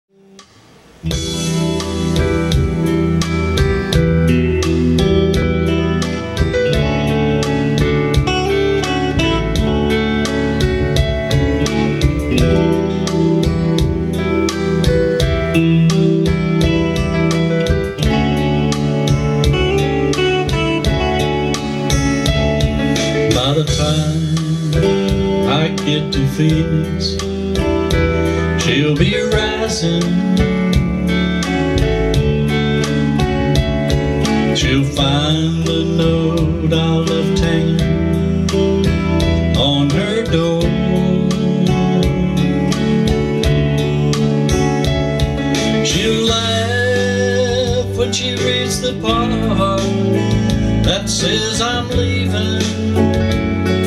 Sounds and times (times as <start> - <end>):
Bass guitar: 0.0 - 53.8.